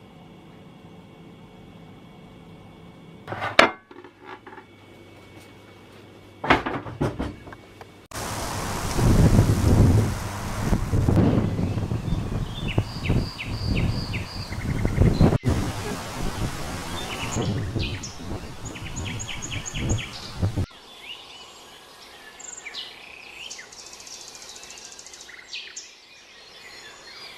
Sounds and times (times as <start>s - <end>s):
Environmental noise: 0.0s - 27.3s
Chirp, tweet: 11.6s - 15.4s, 16.9s - 27.3s.